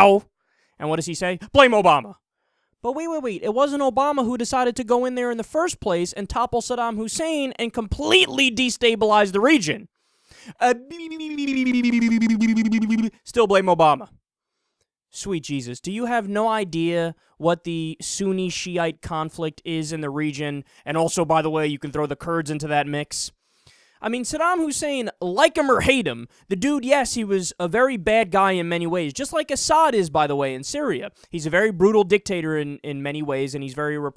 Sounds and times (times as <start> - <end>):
Speech: 0.0 - 2.2, 2.8 - 9.9, 10.5 - 14.2, 15.1 - 23.4, 24.0 - 34.1
Inside, small room: 0.0 - 34.1.